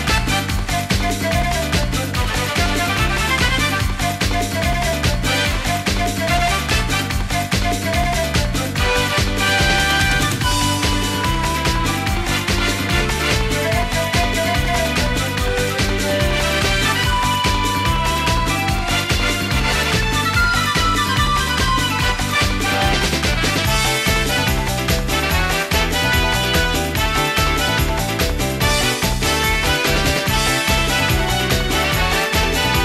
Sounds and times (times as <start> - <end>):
Music: 0.0 - 32.8.